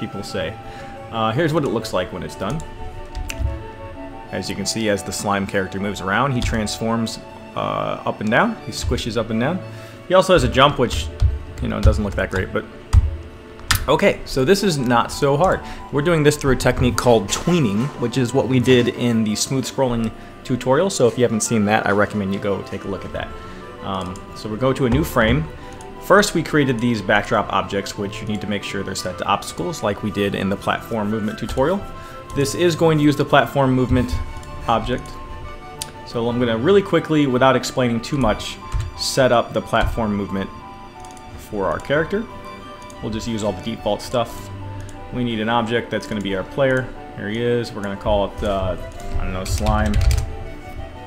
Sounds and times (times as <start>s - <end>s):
Speech: 0.0s - 2.7s, 4.3s - 12.7s, 13.8s - 35.2s, 36.1s - 40.5s, 41.4s - 42.3s, 43.0s - 44.5s, 45.1s - 50.1s
Music: 0.0s - 51.0s.